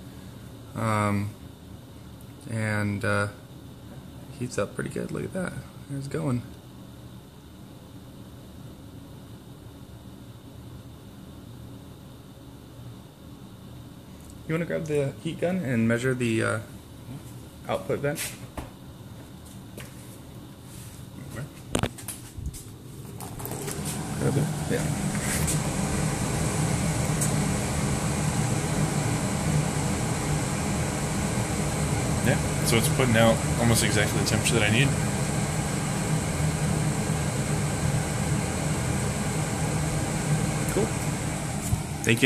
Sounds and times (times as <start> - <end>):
Speech: 0.8 - 1.4, 2.4 - 3.4, 4.3 - 6.5, 14.5 - 16.7, 17.7 - 18.4, 24.2 - 24.9, 32.3 - 35.0, 40.7 - 41.0.